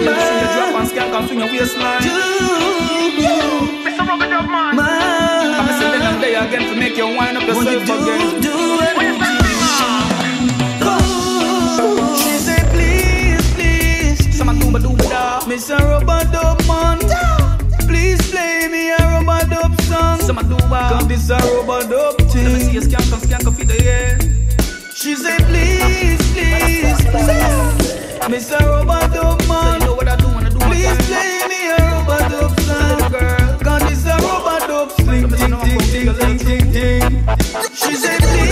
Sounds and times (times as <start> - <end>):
Hip hop music: 0.0 - 38.5.